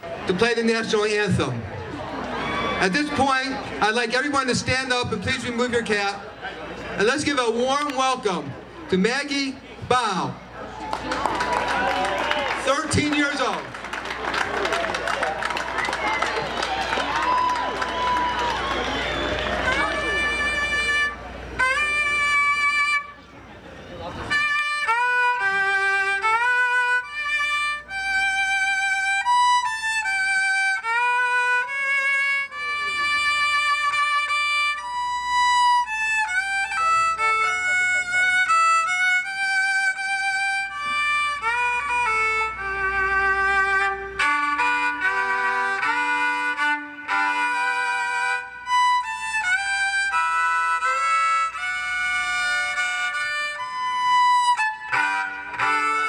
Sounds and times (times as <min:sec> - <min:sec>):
Violin, fiddle: 0:24.0 - 0:56.0.